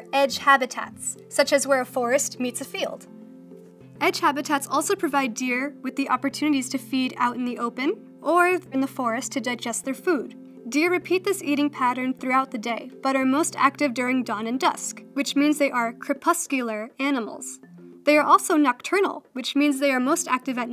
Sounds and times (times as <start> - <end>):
Speech: 0.0 - 3.0, 4.0 - 20.7.